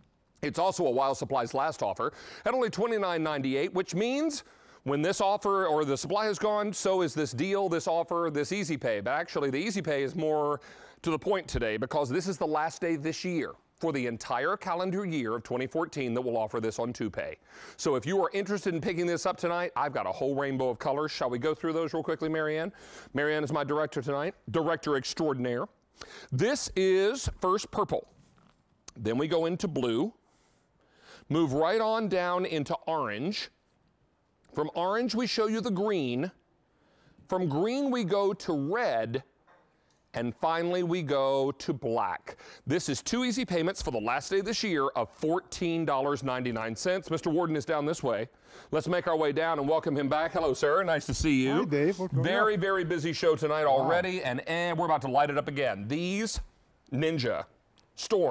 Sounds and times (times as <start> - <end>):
Speech: 0.4 - 28.1, 28.9 - 30.2, 31.3 - 33.6, 34.5 - 36.4, 37.3 - 39.3, 40.2 - 58.3.